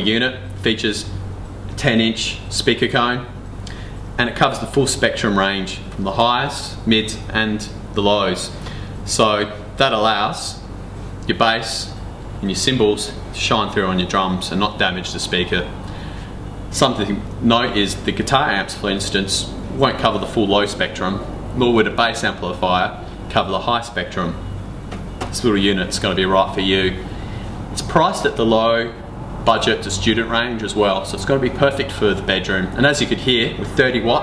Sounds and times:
Speech: 0.0 - 1.2, 1.8 - 3.4, 4.2 - 15.8, 16.7 - 24.4, 25.2 - 27.1, 27.8 - 34.2.

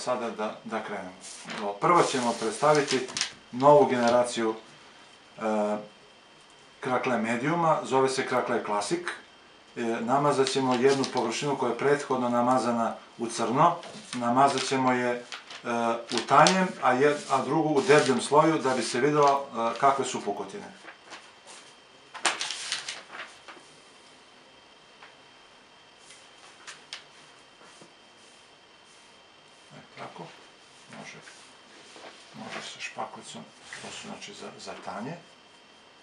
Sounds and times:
Speech: 0.0 - 4.7, 5.4 - 6.0, 6.8 - 20.8, 29.7 - 31.4, 32.4 - 35.4.

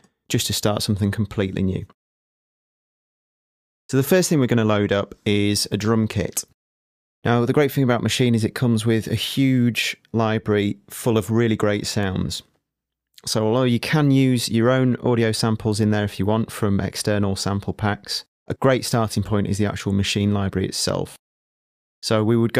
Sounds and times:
Speech: 0.0 - 2.0, 3.9 - 6.6, 7.2 - 12.5, 13.2 - 21.2, 22.0 - 22.5.

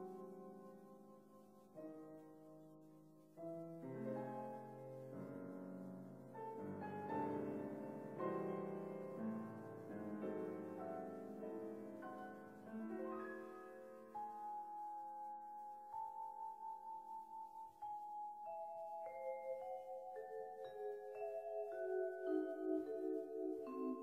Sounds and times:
Piano: 0.0 - 24.0
Vibraphone: 16.0 - 24.0.

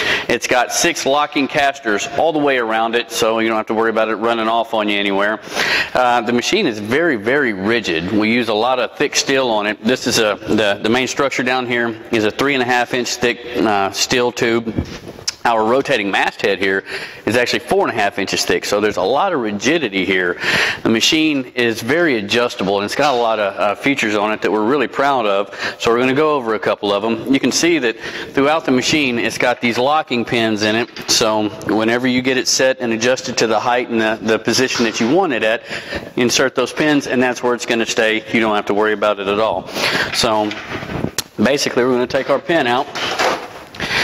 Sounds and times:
Speech: 0.3 - 35.6, 36.2 - 40.6, 41.3 - 43.0.

